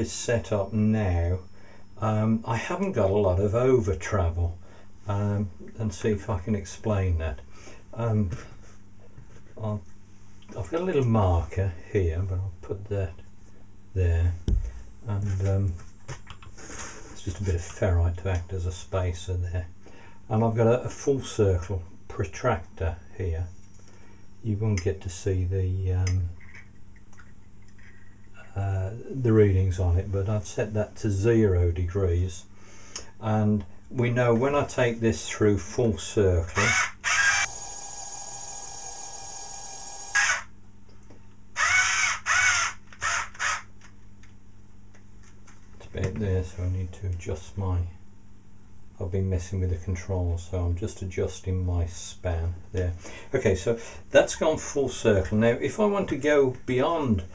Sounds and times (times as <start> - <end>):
Speech: 0.0 - 8.5, 9.5 - 9.9, 10.5 - 13.3, 13.9 - 15.9, 17.1 - 23.6, 24.4 - 26.4, 28.4 - 36.6, 45.8 - 48.0, 49.0 - 57.3.